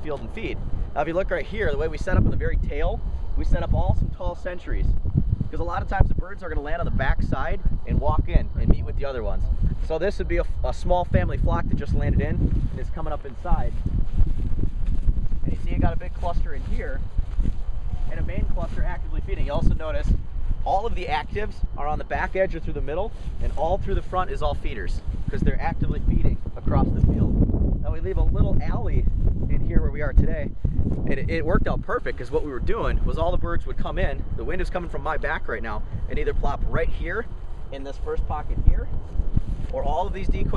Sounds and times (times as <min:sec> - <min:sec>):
Speech: 0:00.0 - 0:04.9, 0:05.5 - 0:13.8, 0:15.4 - 0:17.0, 0:18.1 - 0:38.9, 0:39.7 - 0:40.5.